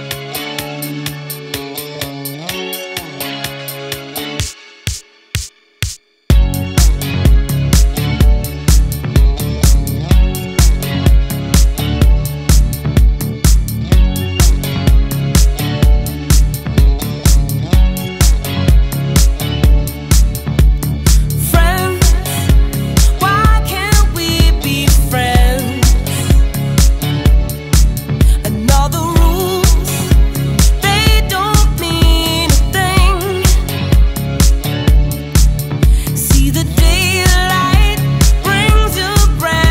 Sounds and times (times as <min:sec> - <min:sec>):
Music: 0:00.0 - 0:39.7.